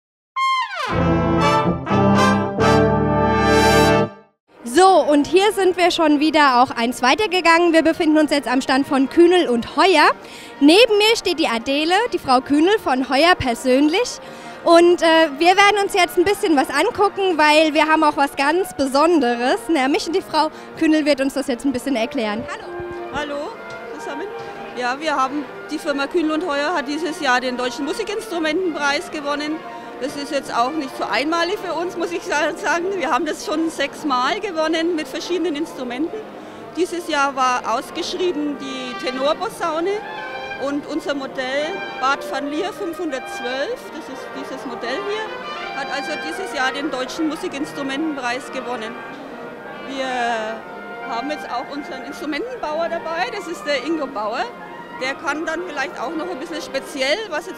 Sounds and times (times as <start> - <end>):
Trombone: 0.4 - 4.3, 21.5 - 36.2, 37.8 - 56.9
Trumpet: 0.4 - 4.3, 7.4 - 57.5.